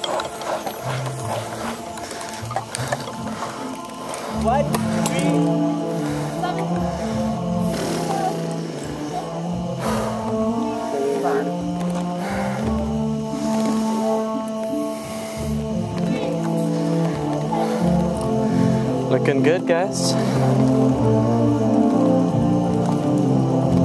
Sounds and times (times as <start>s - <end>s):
Music: 0.0s - 23.8s.